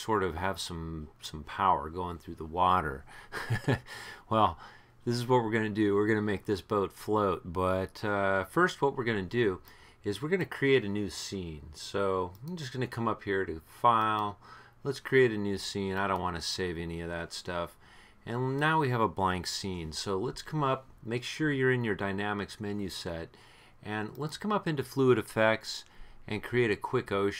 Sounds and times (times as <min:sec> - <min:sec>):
Speech: 0:00.0 - 0:03.1, 0:04.3 - 0:27.3.